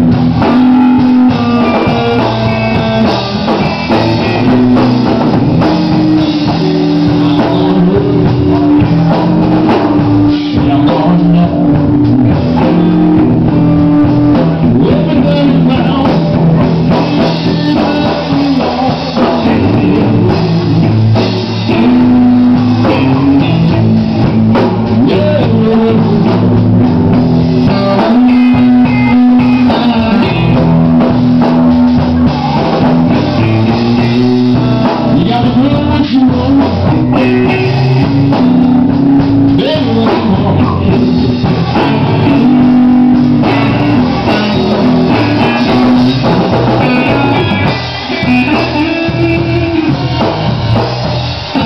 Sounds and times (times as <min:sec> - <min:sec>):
Blues: 0:00.0 - 0:51.6
Guitar: 0:00.0 - 0:51.6
Rock music: 0:00.0 - 0:51.6.